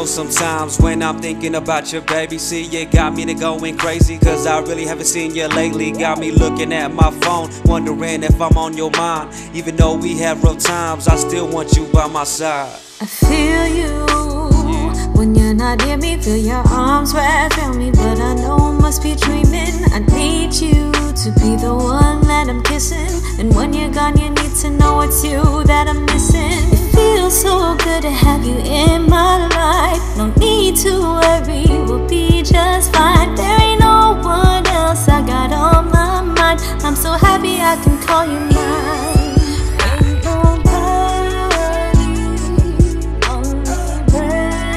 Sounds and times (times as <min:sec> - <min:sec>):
Rhythm and blues: 0:00.0 - 0:44.7.